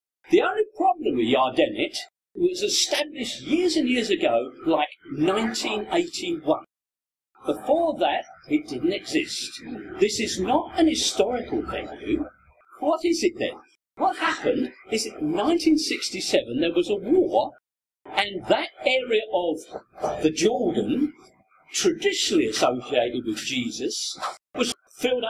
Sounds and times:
Speech: 0.3s - 6.7s, 7.4s - 25.2s.

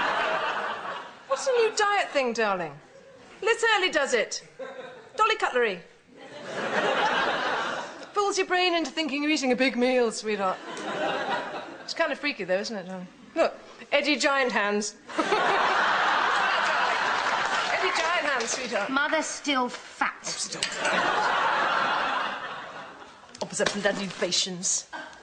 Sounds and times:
Speech: 8.1s - 10.6s, 23.4s - 24.9s.

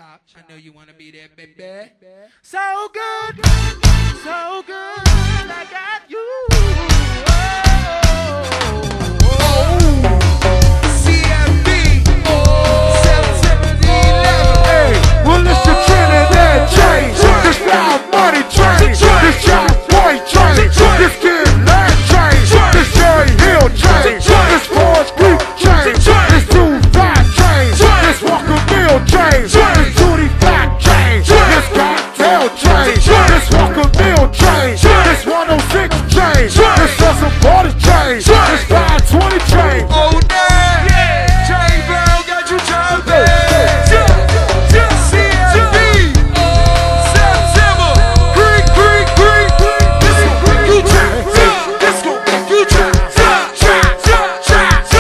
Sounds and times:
Music: 3.0s - 55.0s.

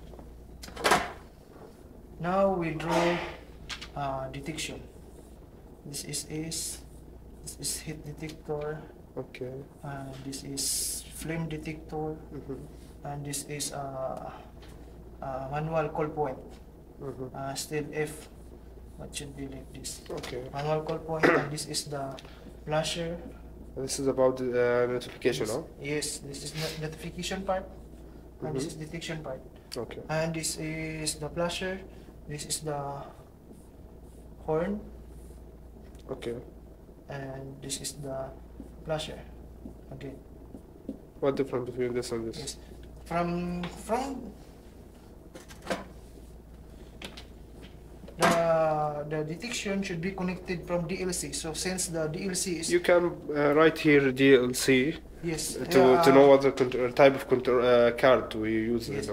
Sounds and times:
Speech: 2.2s - 3.4s, 4.0s - 4.9s, 7.5s - 14.4s, 48.2s - 59.1s.

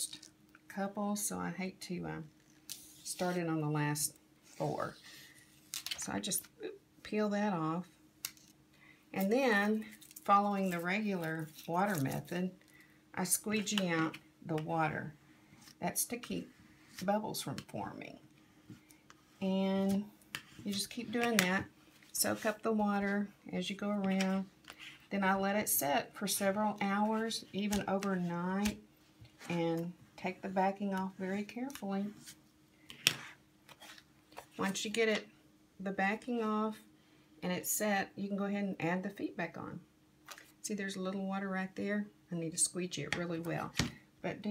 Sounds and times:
Speech: 0.0s - 2.3s, 3.1s - 5.0s, 6.0s - 7.9s, 9.2s - 12.6s, 13.2s - 15.1s, 15.8s - 18.2s, 19.4s - 24.5s, 25.1s - 28.8s, 29.5s - 32.2s, 34.6s - 36.8s, 37.4s - 39.8s, 40.6s - 44.5s.

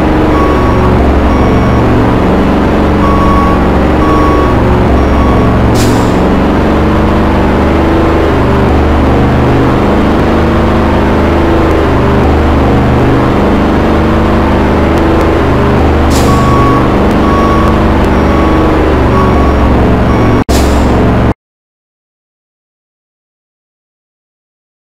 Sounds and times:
Reversing beeps: 0.3s - 2.0s, 3.0s - 6.2s, 16.2s - 20.4s.

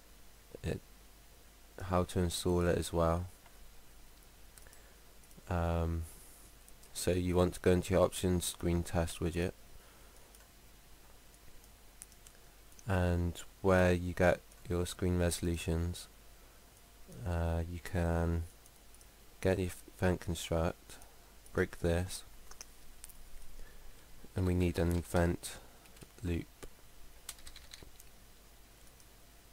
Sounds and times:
Speech: 0.6s - 0.8s, 1.8s - 3.3s, 5.5s - 6.1s, 6.9s - 9.6s, 12.9s - 16.1s, 17.1s - 18.5s, 19.4s - 22.3s, 24.3s - 25.6s, 26.2s - 26.5s.

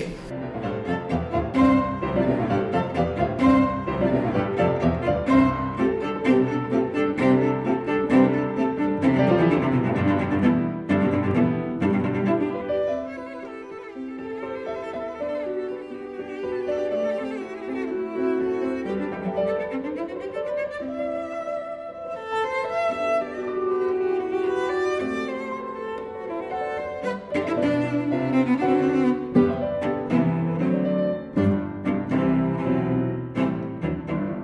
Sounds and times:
Cello: 0.0s - 34.4s.

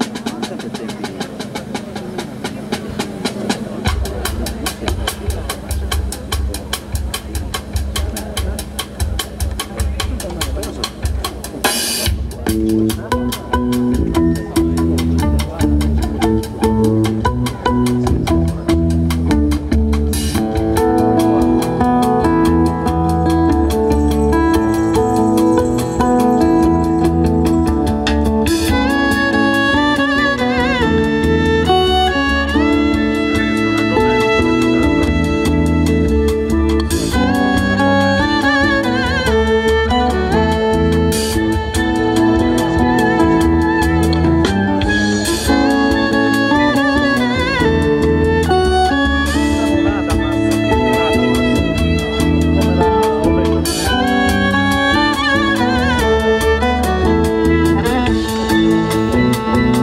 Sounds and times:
Jazz: 0.0s - 59.8s.

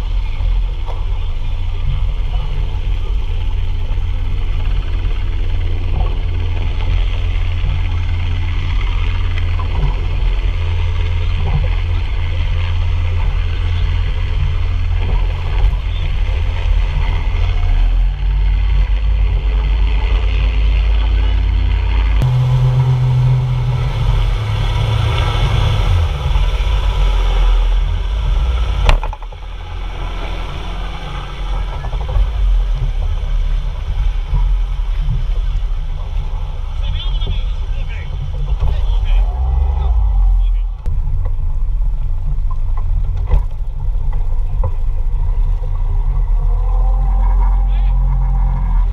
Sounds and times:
Motorboat, speedboat: 0.0s - 48.9s.

